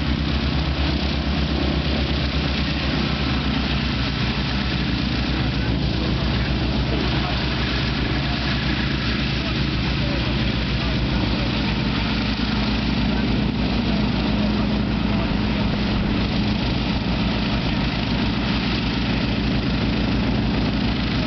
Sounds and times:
Fixed-wing aircraft, airplane: 0:00.0 - 0:21.2
Propeller, airscrew: 0:00.0 - 0:21.2.

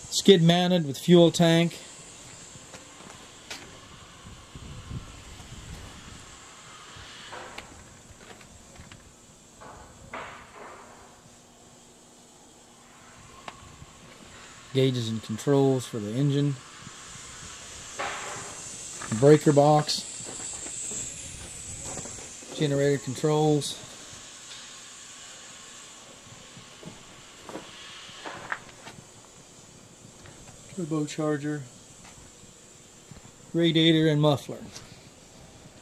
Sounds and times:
Speech: 0:00.1 - 0:01.8, 0:14.8 - 0:16.6, 0:19.1 - 0:20.1, 0:22.6 - 0:23.9, 0:30.7 - 0:31.7, 0:33.5 - 0:34.8.

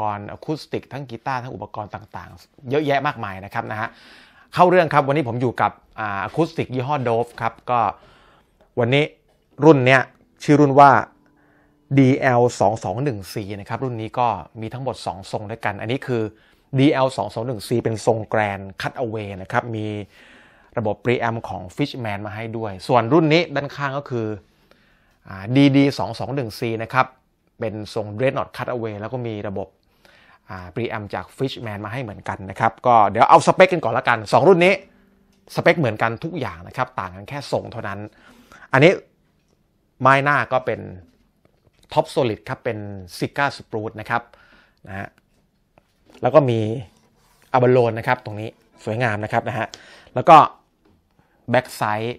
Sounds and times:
Speech: 0:00.0 - 0:08.0, 0:08.8 - 0:11.1, 0:11.9 - 0:20.1, 0:20.8 - 0:24.4, 0:25.2 - 0:29.8, 0:30.5 - 0:34.9, 0:35.5 - 0:39.1, 0:40.0 - 0:41.2, 0:41.8 - 0:45.2, 0:46.1 - 0:50.6, 0:51.5 - 0:52.1.

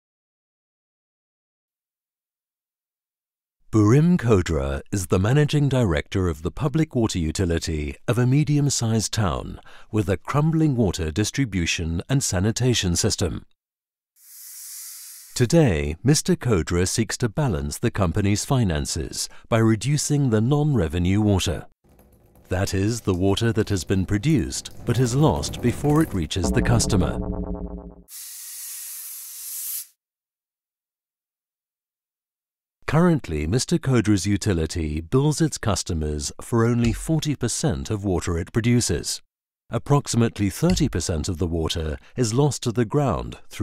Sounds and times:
Speech: 0:03.7 - 0:13.5, 0:15.4 - 0:21.7, 0:22.5 - 0:27.3, 0:32.8 - 0:43.6
Music: 0:24.7 - 0:28.1.

